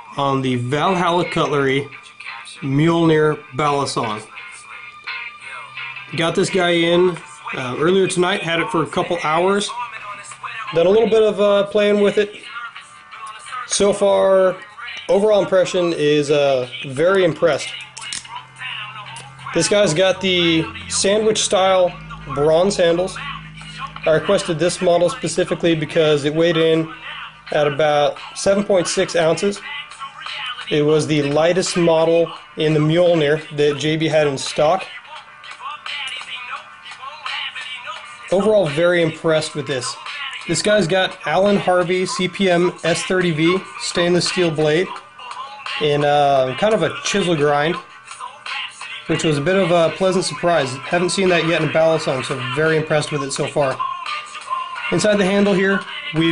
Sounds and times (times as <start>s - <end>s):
Music: 0.0s - 56.3s
Speech: 0.2s - 4.3s, 6.1s - 9.8s, 10.7s - 12.7s, 13.3s - 18.3s, 19.5s - 23.2s, 24.1s - 26.9s, 27.5s - 29.6s, 30.7s - 34.9s, 38.3s - 45.0s, 45.8s - 47.8s, 49.1s - 53.8s, 54.9s - 56.3s.